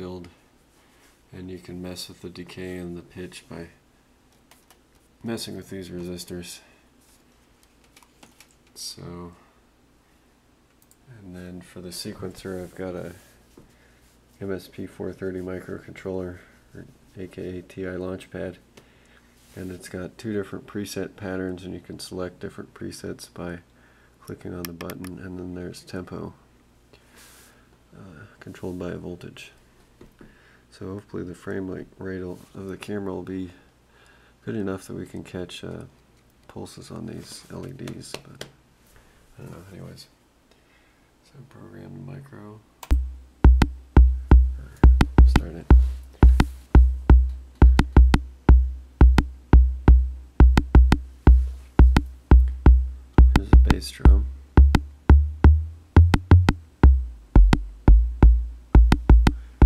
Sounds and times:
Speech: 0:00.0 - 0:00.4, 0:01.3 - 0:03.8, 0:05.2 - 0:06.8, 0:08.8 - 0:09.6, 0:11.1 - 0:13.3, 0:14.4 - 0:18.7, 0:19.6 - 0:26.4, 0:27.9 - 0:29.6, 0:30.7 - 0:33.7, 0:34.4 - 0:38.6, 0:39.4 - 0:40.2, 0:41.2 - 0:42.7, 0:44.6 - 0:45.7, 0:53.3 - 0:54.3.

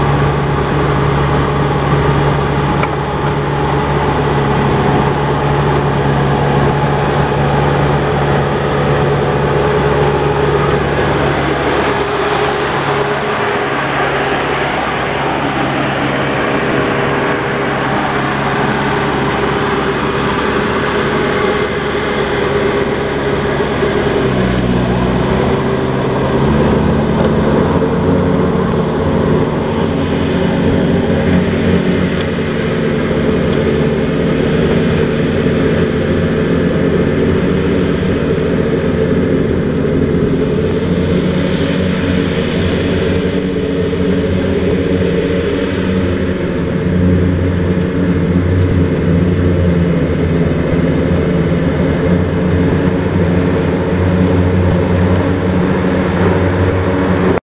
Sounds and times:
Vehicle: 0:00.0 - 0:57.4.

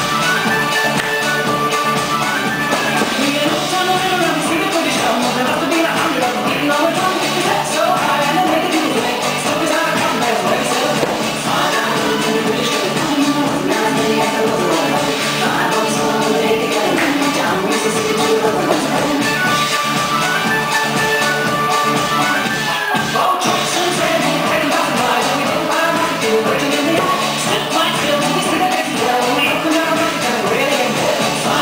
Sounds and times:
Dance music: 0:00.0 - 0:31.6.

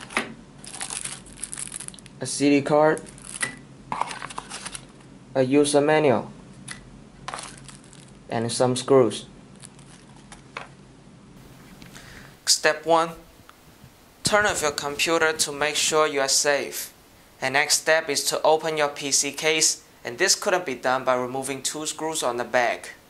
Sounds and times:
Speech: 0:02.2 - 0:03.1, 0:05.4 - 0:06.4, 0:08.3 - 0:09.3, 0:12.5 - 0:13.3, 0:14.2 - 0:23.0.

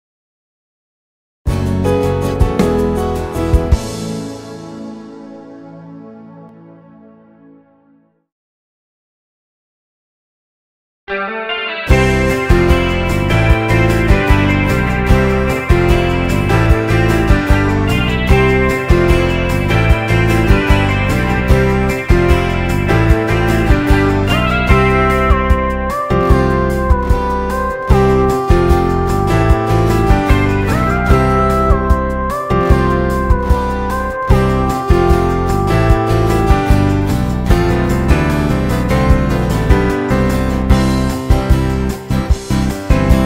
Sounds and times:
Tender music: 0:01.5 - 0:08.3, 0:11.2 - 0:43.2.

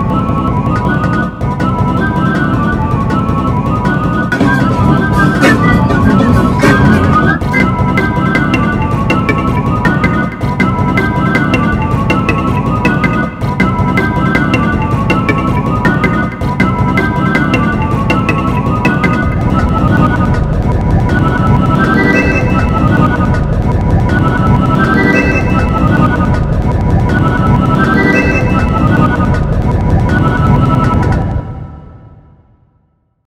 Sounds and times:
Music: 0:00.0 - 0:33.3.

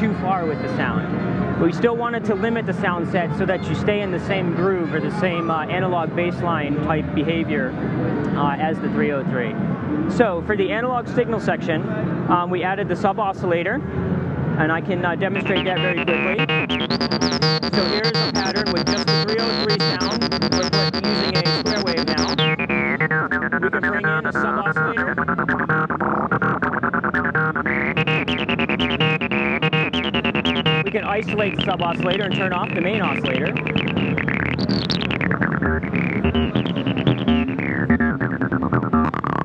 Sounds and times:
Synthesizer: 0:15.4 - 0:39.4.

